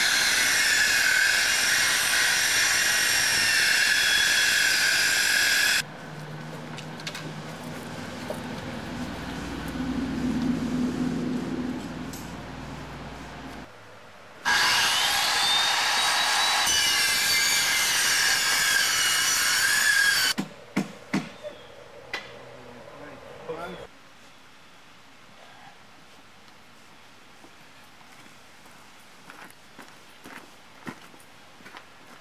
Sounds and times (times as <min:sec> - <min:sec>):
Outside, rural or natural: 0:00.0 - 0:32.2
Speech: 0:22.5 - 0:23.9.